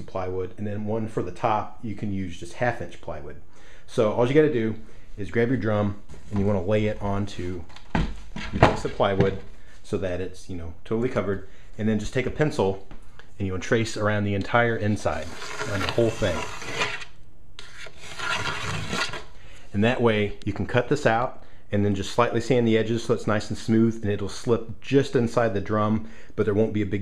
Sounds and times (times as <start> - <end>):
Speech: 0.0 - 7.7, 8.5 - 16.5, 19.7 - 27.0.